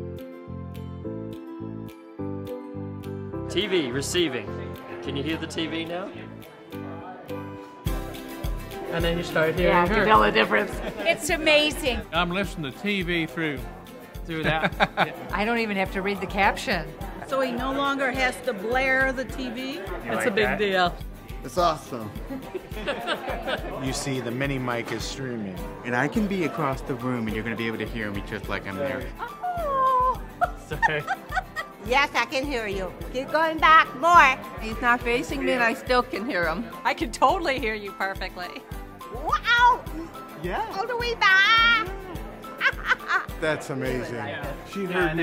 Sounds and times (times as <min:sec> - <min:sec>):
Music: 0:00.0 - 0:45.2.